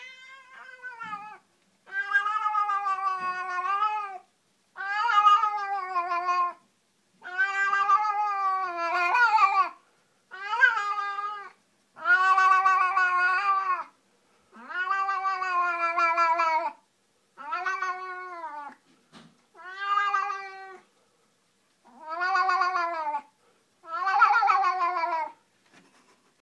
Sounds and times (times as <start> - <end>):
Cat: 0.0 - 6.6, 7.2 - 16.8, 17.4 - 18.8, 19.5 - 20.9, 21.8 - 26.2.